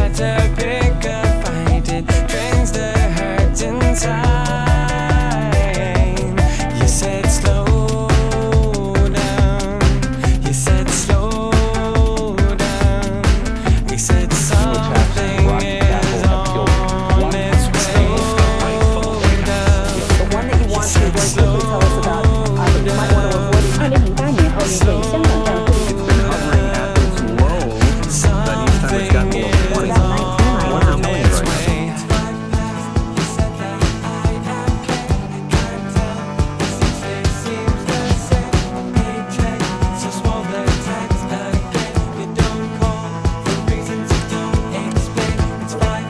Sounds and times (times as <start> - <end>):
Music: 0.0 - 46.0
Speech: 0.0 - 46.0.